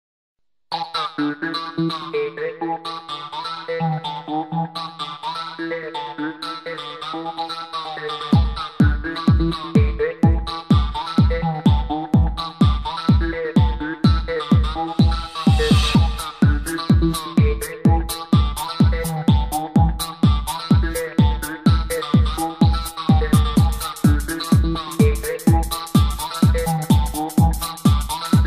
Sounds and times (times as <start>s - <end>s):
Electronic dance music: 0.7s - 28.4s.